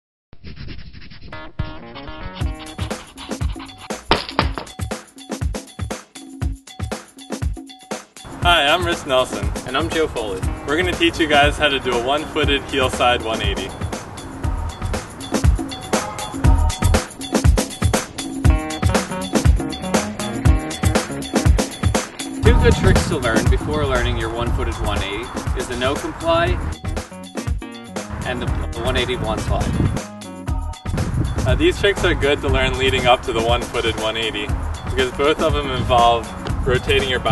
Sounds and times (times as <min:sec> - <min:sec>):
Music: 0:01.3 - 0:37.3
Speech: 0:08.4 - 0:13.7, 0:22.4 - 0:26.6, 0:28.3 - 0:29.7, 0:31.5 - 0:37.3.